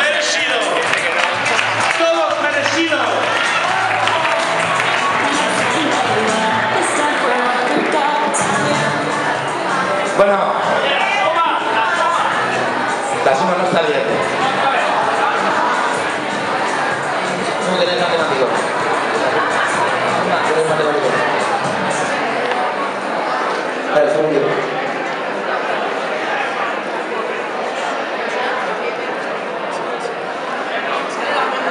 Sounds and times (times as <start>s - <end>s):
Speech: 0.0s - 4.4s, 13.1s - 16.1s, 17.2s - 21.4s.